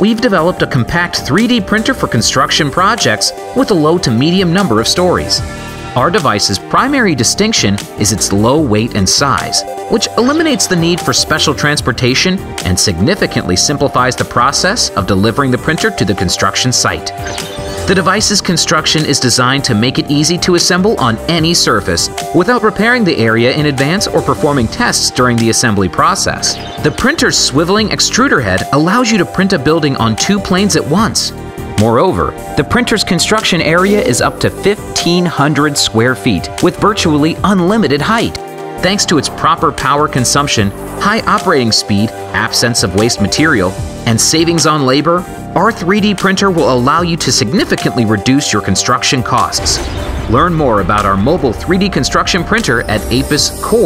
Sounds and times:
Speech: 0.0 - 5.4, 6.0 - 17.3, 17.9 - 53.8
Music: 0.0 - 53.8.

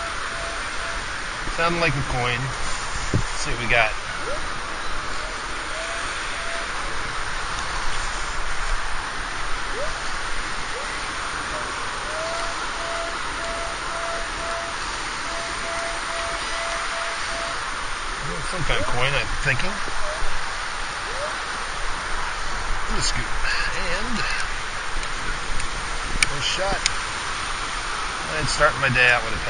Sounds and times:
Speech: 1.5 - 2.6, 18.2 - 19.8, 26.3 - 26.8, 28.3 - 29.5.

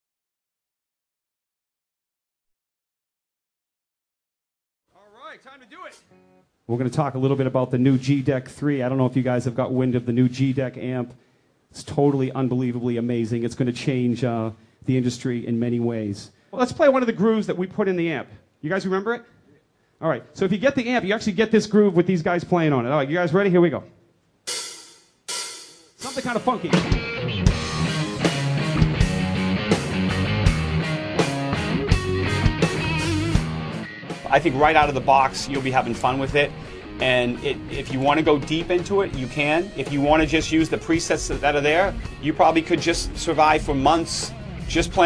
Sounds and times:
Speech: 4.9 - 6.1, 6.7 - 19.3, 20.0 - 24.0, 26.0 - 26.8, 34.3 - 45.0
Guitar: 5.8 - 8.0, 26.3 - 45.0.

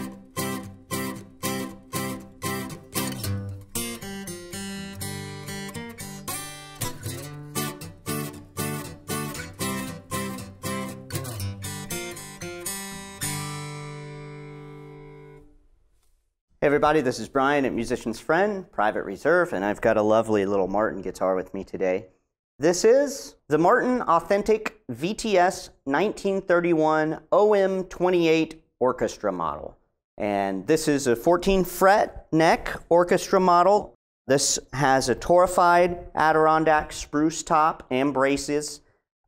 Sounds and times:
Speech: 16.6 - 38.8.

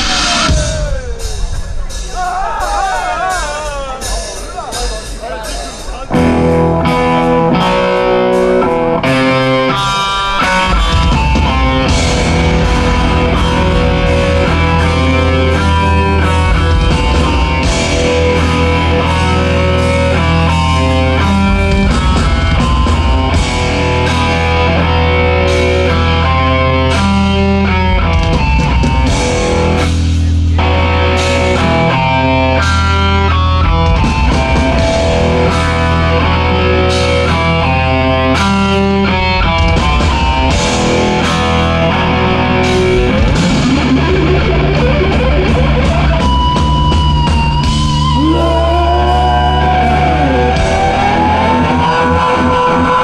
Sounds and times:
Music: 0.0 - 53.0.

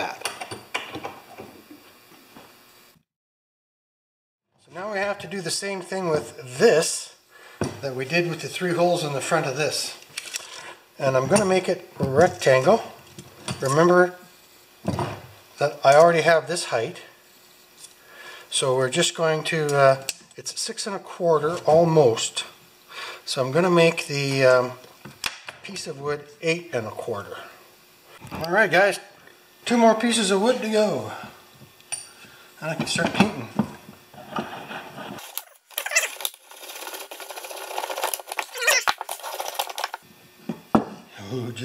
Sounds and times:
Speech: 4.6 - 7.2, 7.8 - 10.0, 11.0 - 13.0, 13.6 - 14.2, 15.6 - 17.2, 18.5 - 22.6, 23.3 - 24.8, 25.6 - 27.6, 28.3 - 31.3, 32.6 - 33.6, 41.2 - 41.6.

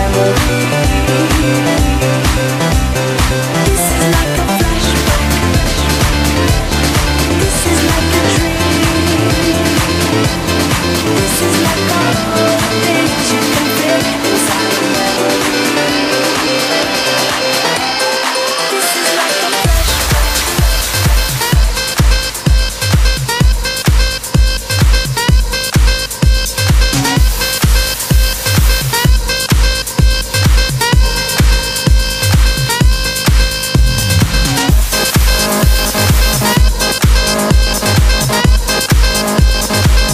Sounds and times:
Electronic dance music: 0.0 - 40.1.

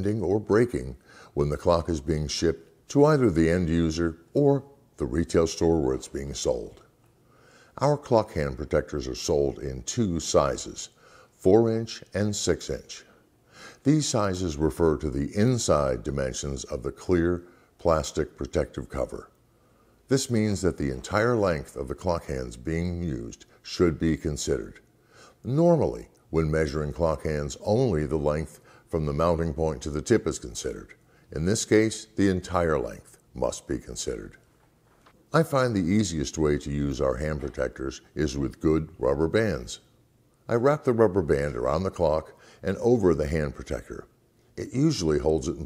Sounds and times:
Speech: 0.0 - 6.9, 7.7 - 13.2, 13.8 - 19.4, 20.1 - 34.5, 35.3 - 39.9, 40.5 - 45.6.

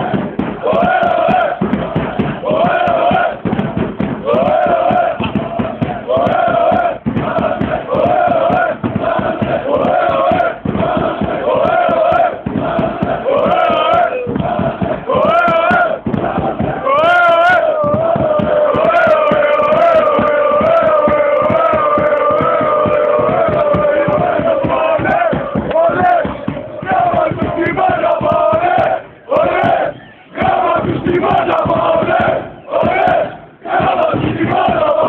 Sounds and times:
Music: 0.0 - 35.0.

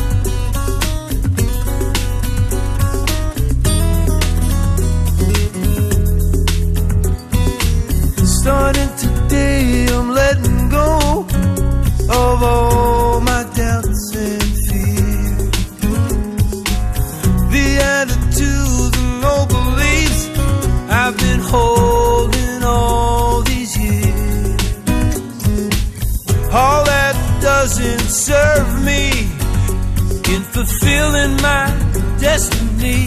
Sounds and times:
Music: 0.0 - 33.0.

